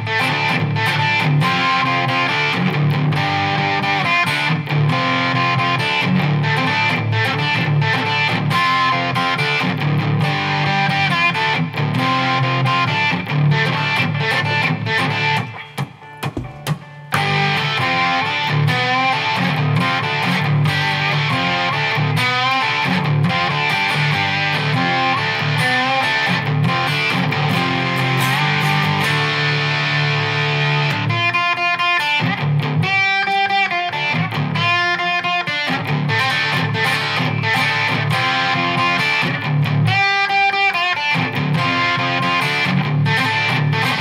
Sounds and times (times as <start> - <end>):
Electric guitar: 0.0 - 44.0.